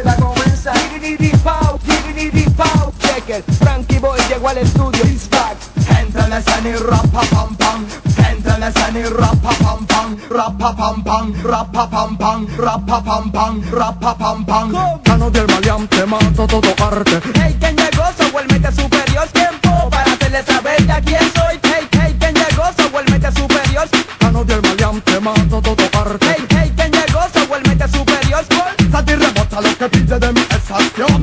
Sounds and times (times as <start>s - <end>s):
Music: 0.0s - 31.2s.